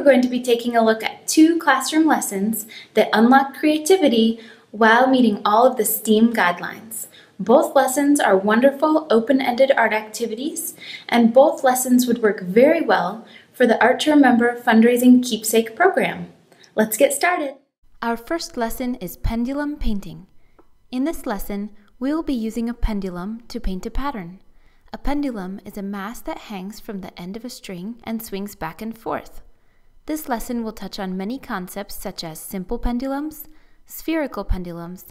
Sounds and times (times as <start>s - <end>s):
Speech: 0.0s - 20.3s, 20.9s - 29.4s, 30.1s - 35.1s.